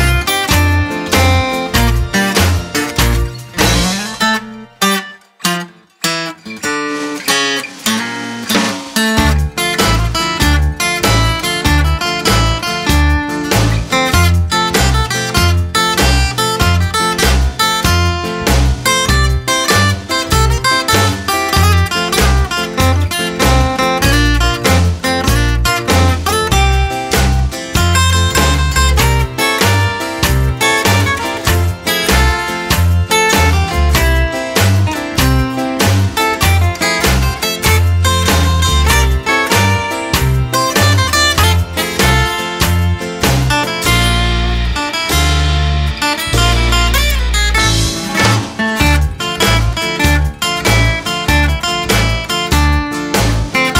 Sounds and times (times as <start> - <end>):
Guitar: 0.0 - 53.7.